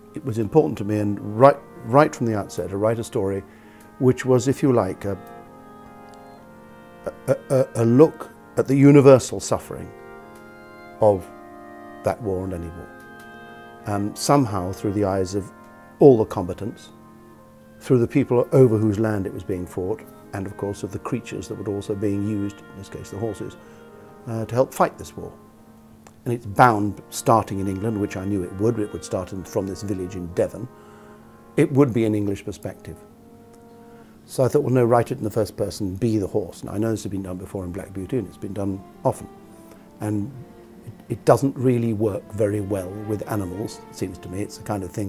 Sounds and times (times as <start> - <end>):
Music: 0.0 - 45.0
Speech: 0.2 - 3.4, 4.0 - 5.2, 7.1 - 9.9, 11.0 - 11.3, 12.1 - 12.9, 13.8 - 17.0, 17.8 - 23.6, 24.3 - 25.4, 26.2 - 30.7, 31.6 - 33.0, 34.3 - 39.3, 40.0 - 45.0.